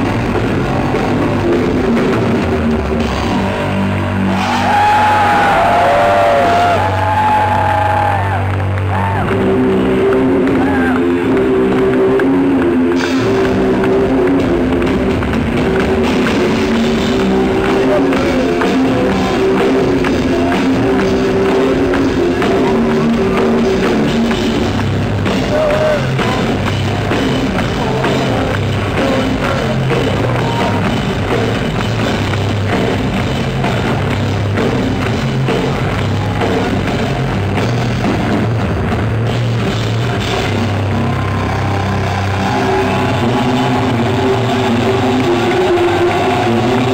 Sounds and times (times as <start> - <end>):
Bass guitar: 0.0 - 46.9
Heavy metal: 0.0 - 46.9.